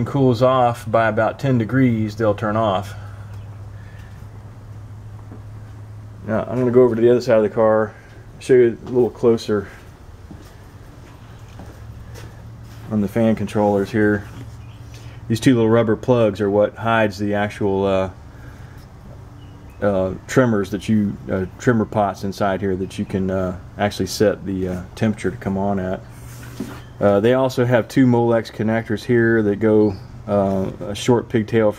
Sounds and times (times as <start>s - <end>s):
Speech: 0.0s - 3.2s, 6.2s - 9.9s, 12.9s - 14.5s, 15.3s - 18.2s, 19.8s - 26.1s, 27.0s - 31.7s.